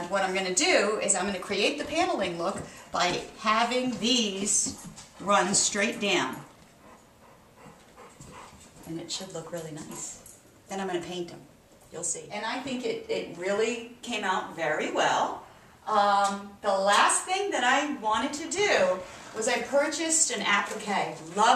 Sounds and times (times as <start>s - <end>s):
Speech: 0.0s - 6.5s, 8.9s - 21.5s.